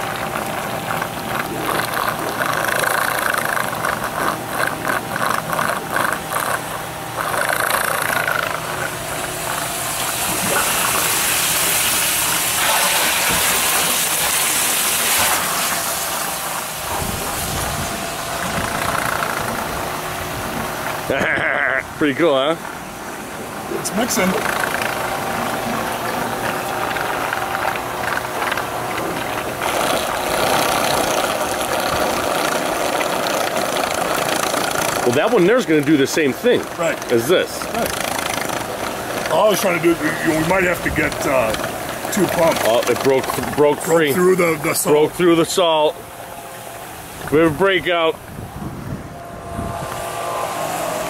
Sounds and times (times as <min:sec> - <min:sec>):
Water: 0:00.0 - 0:51.0.